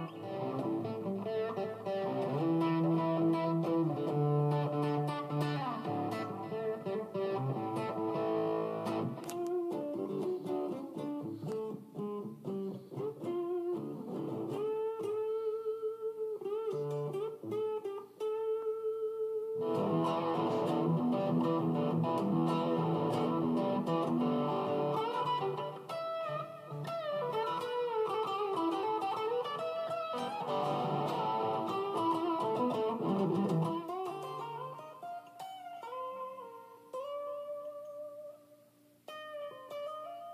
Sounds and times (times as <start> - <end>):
Electric guitar: 0.0 - 40.3.